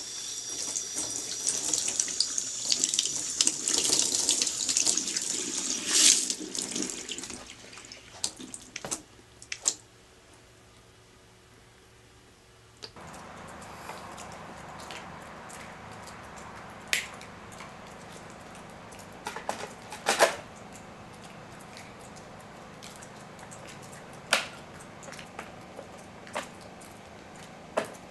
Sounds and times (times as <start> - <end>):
Sink (filling or washing): 0.0 - 8.7
Water: 0.0 - 9.9, 12.9 - 28.1.